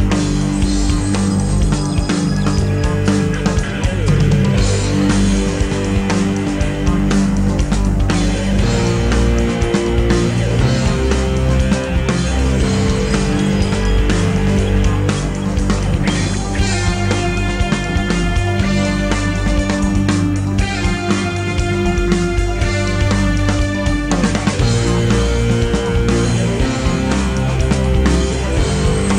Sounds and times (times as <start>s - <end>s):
Progressive rock: 0.0s - 29.1s.